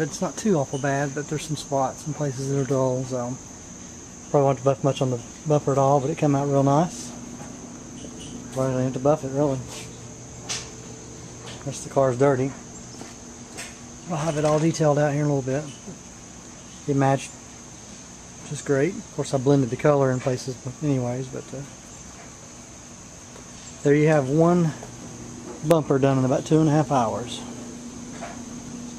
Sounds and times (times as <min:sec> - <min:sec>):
Speech: 0:00.0 - 0:03.4, 0:04.3 - 0:07.2, 0:08.5 - 0:09.7, 0:11.6 - 0:12.6, 0:14.1 - 0:15.9, 0:16.9 - 0:17.3, 0:18.4 - 0:21.7, 0:23.8 - 0:24.8, 0:25.6 - 0:27.6.